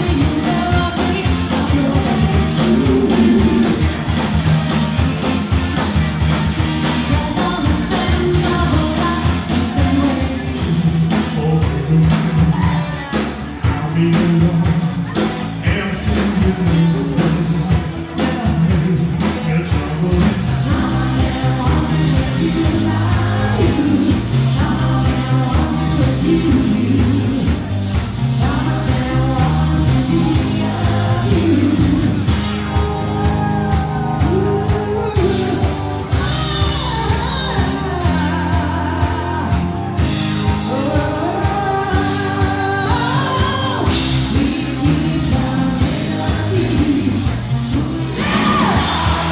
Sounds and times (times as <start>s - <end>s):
Music: 0.0s - 49.3s.